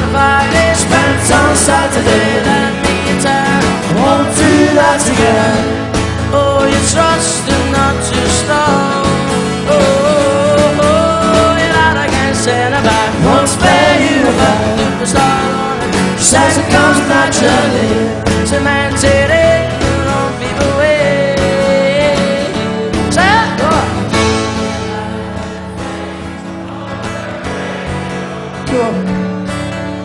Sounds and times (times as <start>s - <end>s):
Singing: 0.0s - 29.3s
Music: 0.0s - 30.0s.